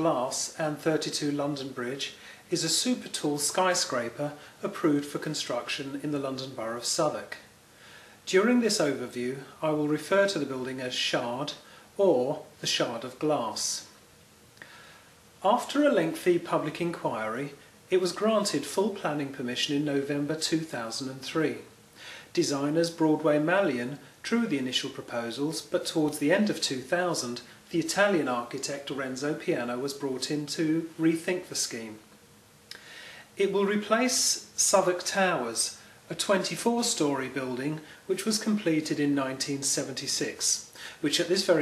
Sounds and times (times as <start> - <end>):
Speech: 0.0 - 7.5, 8.2 - 14.0, 15.4 - 21.7, 22.3 - 32.1, 33.4 - 41.6.